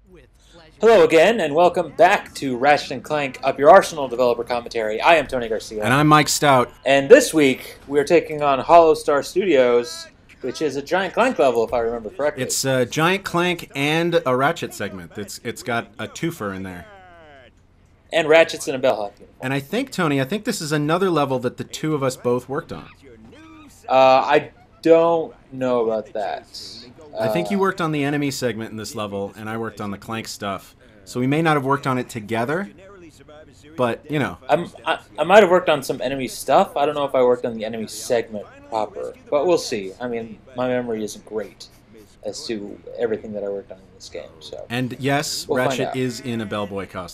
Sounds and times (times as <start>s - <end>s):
Speech: 0.1s - 17.5s, 18.2s - 47.1s.